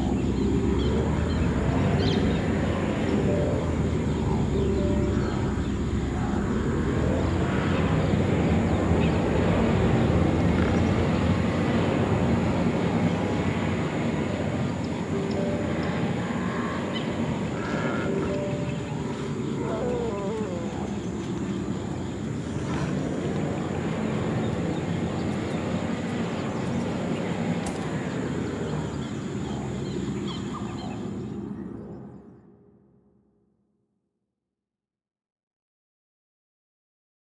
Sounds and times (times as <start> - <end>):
Music: 0.0 - 7.4, 12.6 - 21.7
Outside, rural or natural: 0.0 - 34.0.